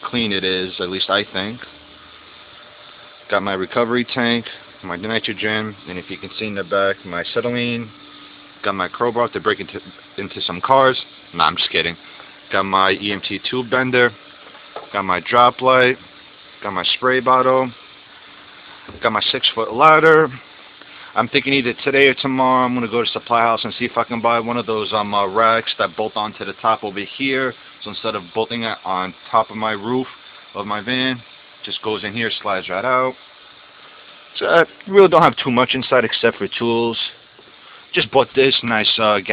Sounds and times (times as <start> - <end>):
Speech: 0.0 - 1.7, 3.3 - 8.0, 8.6 - 14.2, 14.9 - 16.0, 16.6 - 17.8, 18.9 - 20.4, 21.2 - 33.2, 34.3 - 37.2, 37.9 - 39.3.